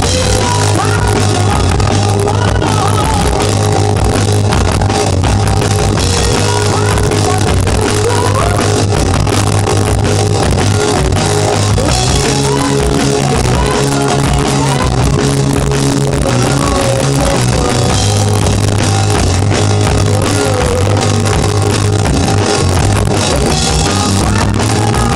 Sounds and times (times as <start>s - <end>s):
Rock and roll: 0.0s - 25.1s.